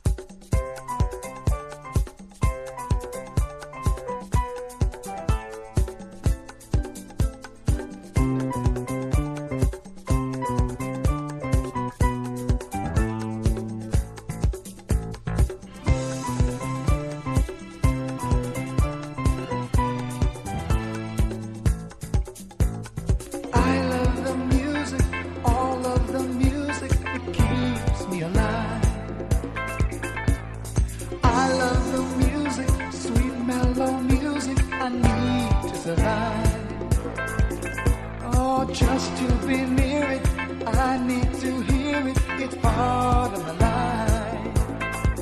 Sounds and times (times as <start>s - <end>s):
Pop music: 0.0s - 45.2s.